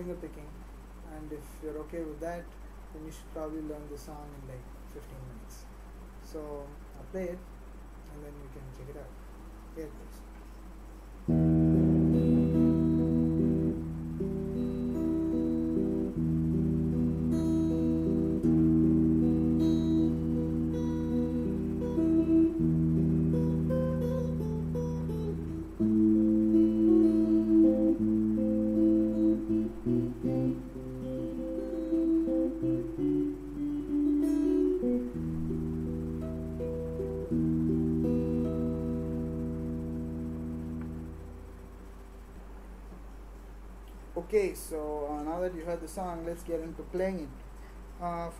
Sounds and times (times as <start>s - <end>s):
Electric guitar: 11.3s - 42.0s.